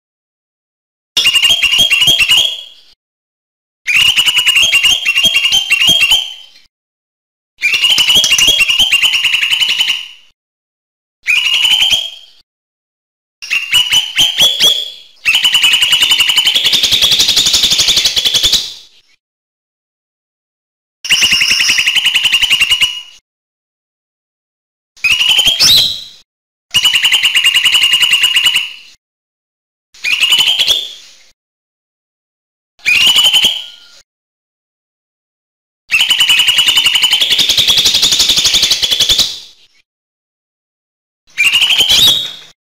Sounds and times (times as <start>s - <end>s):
Bird: 1.2s - 3.0s, 3.9s - 6.7s, 7.6s - 10.4s, 11.2s - 12.4s, 13.4s - 19.2s, 21.1s - 23.2s, 25.0s - 29.0s, 30.0s - 31.4s, 32.8s - 34.0s, 35.9s - 39.9s, 41.3s - 42.6s.